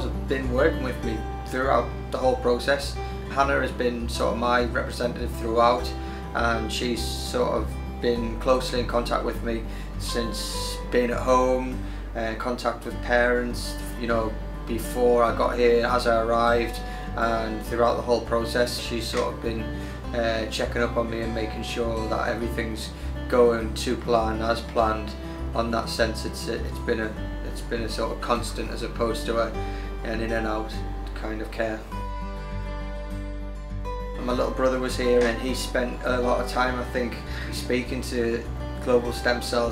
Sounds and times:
Speech: 0.0s - 32.0s, 34.2s - 39.7s
Music: 0.0s - 39.7s.

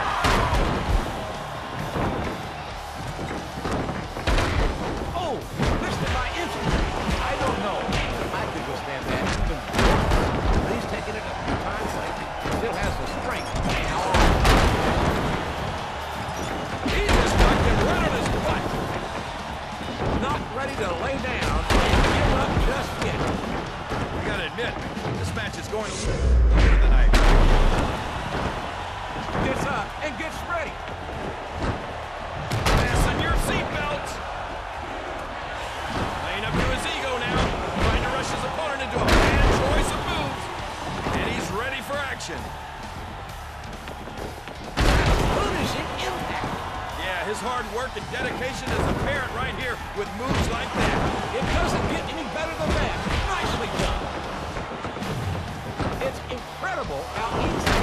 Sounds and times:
Music: 0.0s - 57.8s
Speech: 5.2s - 9.6s, 10.6s - 14.2s, 20.2s - 23.3s, 24.2s - 27.2s, 36.2s - 40.4s, 45.3s - 54.0s, 56.0s - 57.8s.

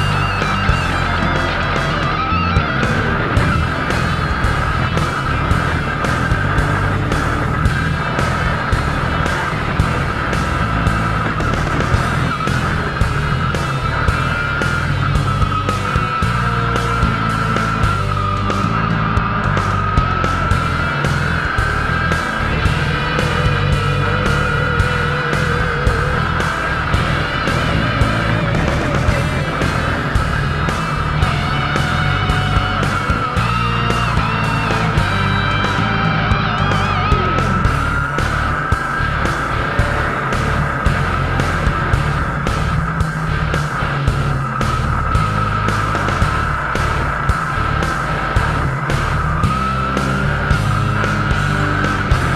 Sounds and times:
Music: 0.0s - 52.3s
Truck: 0.0s - 52.3s.

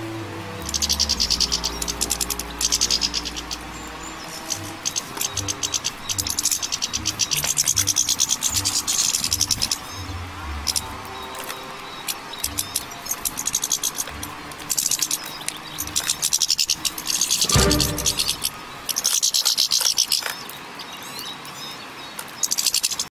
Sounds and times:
Music: 0.0s - 18.7s
Bird: 0.6s - 23.1s.

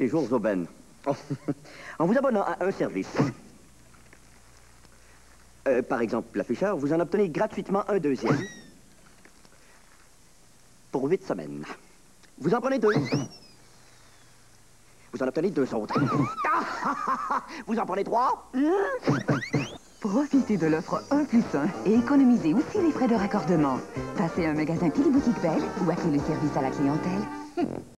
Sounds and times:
Speech: 0.0s - 1.3s, 5.7s - 8.3s, 11.0s - 11.8s, 17.7s - 18.8s
Music: 20.0s - 27.9s.

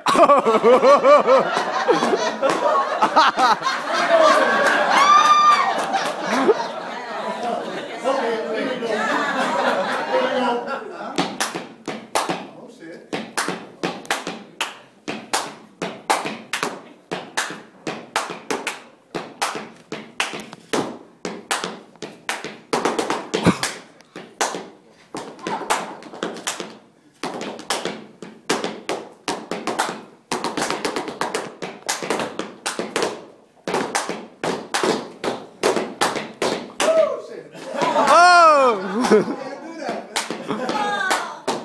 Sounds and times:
Inside, large room or hall: 0.0s - 41.6s.

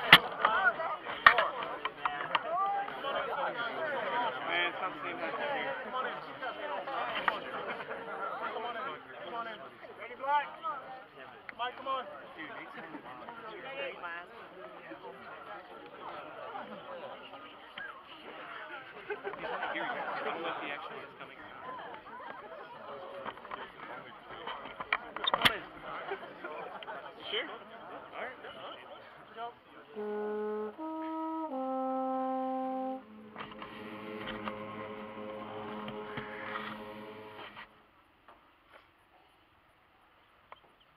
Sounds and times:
Speech: 0.0s - 30.0s
Music: 30.0s - 37.7s.

